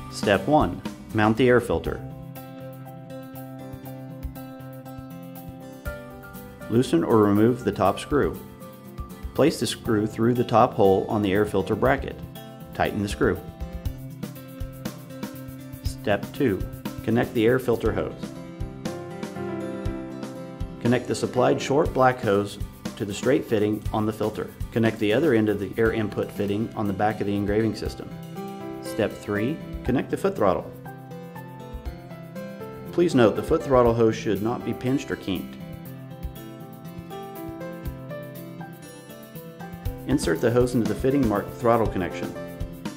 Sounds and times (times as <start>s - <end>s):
Music: 0.0s - 42.9s
Speech: 0.1s - 2.1s, 6.7s - 8.4s, 9.4s - 13.5s, 15.9s - 18.2s, 20.8s - 28.2s, 28.8s - 30.8s, 32.9s - 35.6s, 40.1s - 42.4s.